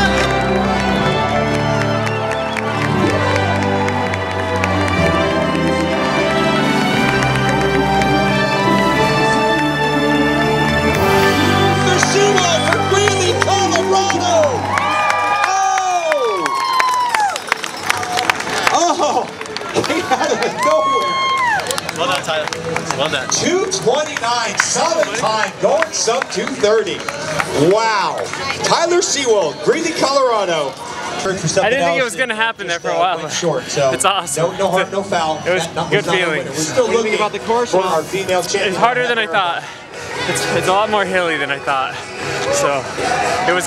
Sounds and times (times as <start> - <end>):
Crowd: 0.0 - 43.6
Music: 0.0 - 43.6
Outside, urban or manmade: 0.0 - 43.6.